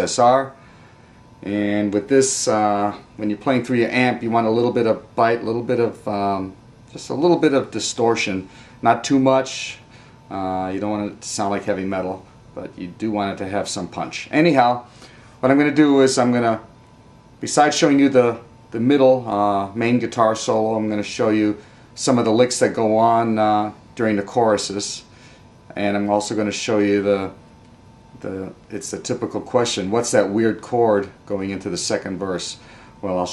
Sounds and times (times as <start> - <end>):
Speech: 0.0 - 0.6, 1.4 - 16.7, 17.4 - 25.1, 25.7 - 27.4, 28.2 - 33.3.